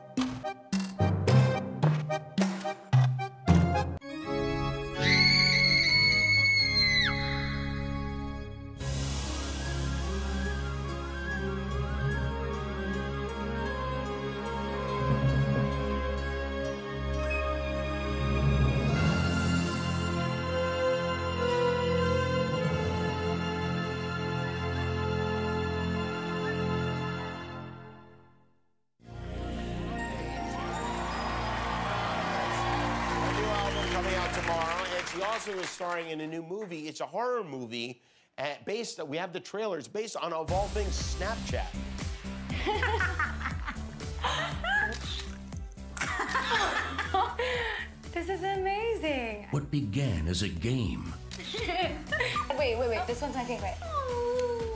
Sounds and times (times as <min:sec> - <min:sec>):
Music: 0:00.0 - 0:37.5, 0:40.1 - 0:54.7.